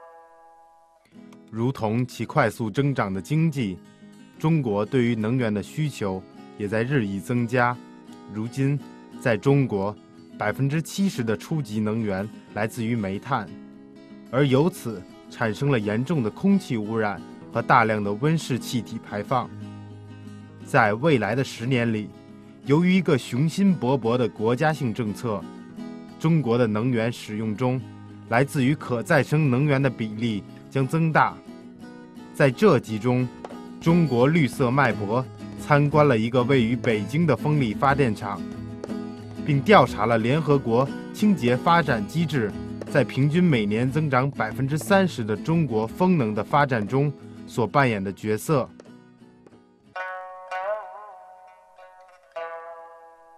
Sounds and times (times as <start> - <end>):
Music: 0.0 - 53.3
Speech: 1.5 - 3.8, 4.4 - 13.6, 14.4 - 19.5, 20.7 - 25.5, 26.2 - 31.4, 32.4 - 38.5, 39.5 - 48.7.